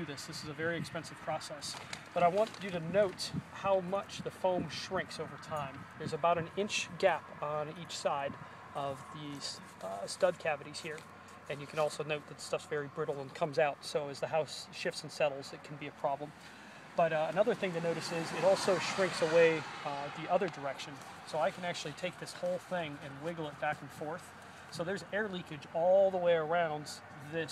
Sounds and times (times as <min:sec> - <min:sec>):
Speech: 0:00.0 - 0:16.4, 0:17.0 - 0:27.5.